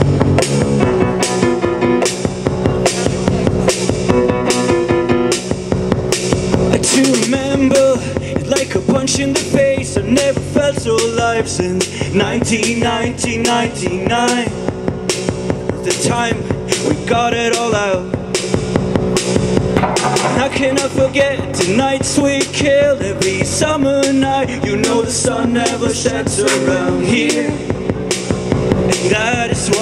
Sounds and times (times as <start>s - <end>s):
Music: 0.0s - 29.8s.